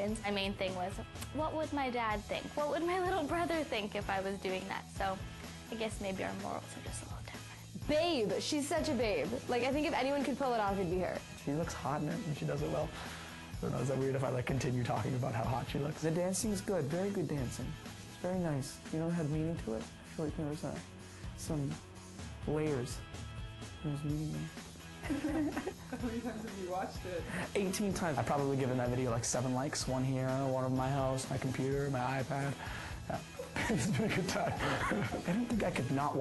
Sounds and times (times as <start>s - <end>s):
Music: 0.0s - 36.2s.